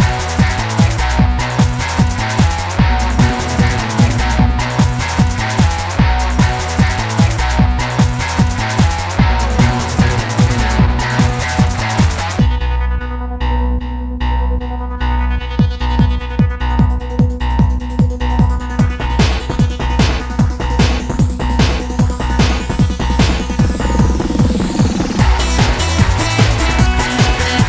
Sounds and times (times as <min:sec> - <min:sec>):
Music: 0:00.0 - 0:27.6.